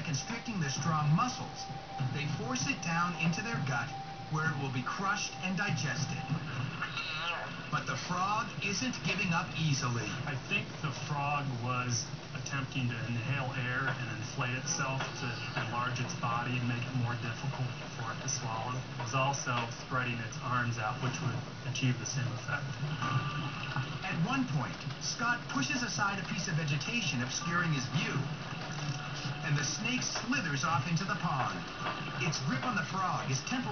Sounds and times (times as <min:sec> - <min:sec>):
Speech: 0:00.0 - 0:06.4, 0:07.7 - 0:22.8, 0:24.0 - 0:28.3, 0:29.4 - 0:33.7.